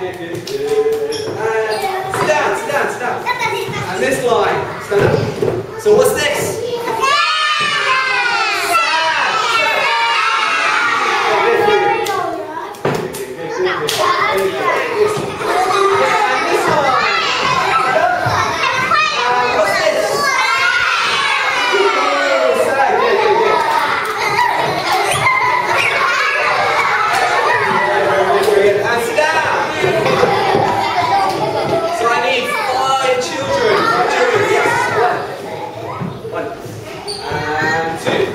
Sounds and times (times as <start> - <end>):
Child speech, kid speaking: 1.6 - 28.6, 29.4 - 36.4.